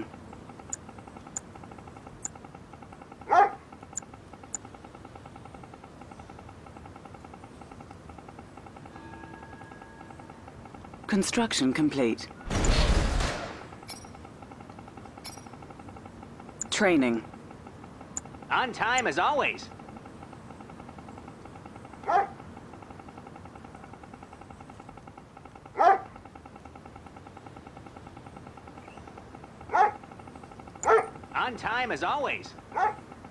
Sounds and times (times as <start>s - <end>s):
Speech: 11.1s - 12.3s, 16.7s - 17.3s, 18.5s - 19.7s, 31.4s - 32.6s.